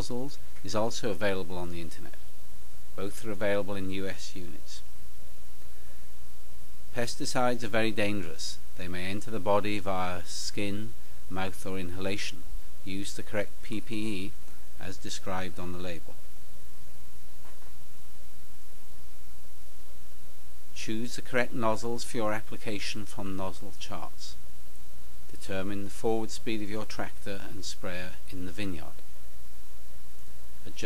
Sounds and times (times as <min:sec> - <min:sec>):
Speech: 0:00.0 - 0:02.2, 0:03.0 - 0:04.9, 0:06.9 - 0:16.2, 0:20.8 - 0:24.4, 0:25.3 - 0:29.0.